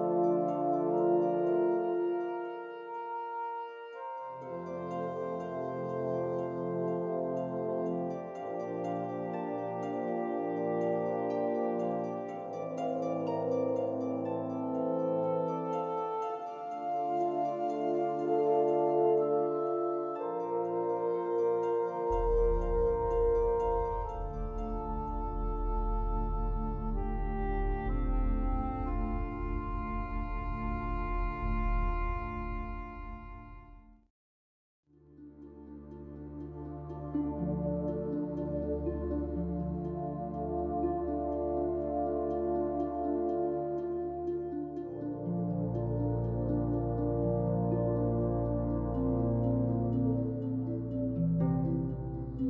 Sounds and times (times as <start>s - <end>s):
New-age music: 0.0s - 34.1s, 35.0s - 52.4s.